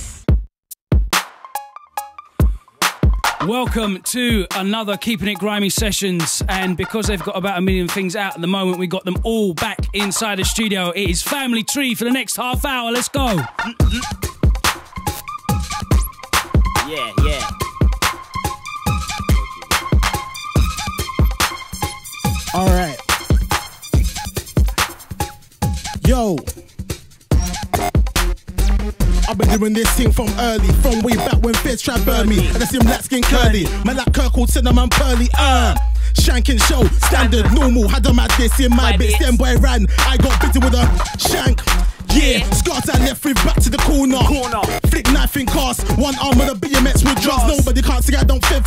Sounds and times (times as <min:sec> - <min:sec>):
Hip hop music: 0:01.1 - 0:48.6
Rapping: 0:03.4 - 0:14.1, 0:16.9 - 0:17.5, 0:29.3 - 0:48.6
Song: 0:13.2 - 0:24.1, 0:29.1 - 0:48.6.